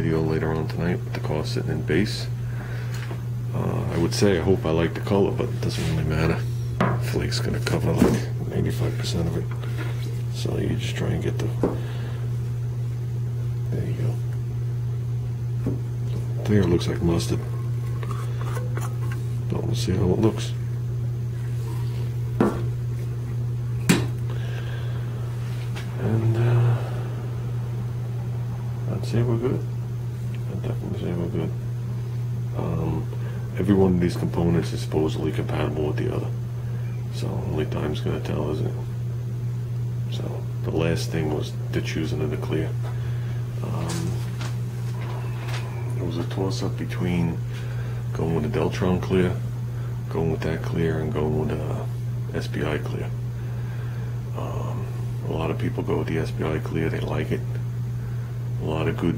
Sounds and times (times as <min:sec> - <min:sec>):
Speech: 0:00.0 - 0:02.4, 0:03.5 - 0:09.5, 0:10.3 - 0:11.6, 0:13.6 - 0:14.3, 0:16.4 - 0:17.5, 0:19.5 - 0:20.6, 0:26.0 - 0:26.8, 0:28.9 - 0:29.7, 0:30.5 - 0:31.6, 0:32.5 - 0:36.4, 0:37.1 - 0:38.9, 0:40.1 - 0:42.8, 0:43.6 - 0:44.3, 0:45.8 - 0:47.4, 0:48.1 - 0:49.4, 0:50.1 - 0:53.2, 0:54.4 - 0:57.6, 0:58.6 - 0:59.1.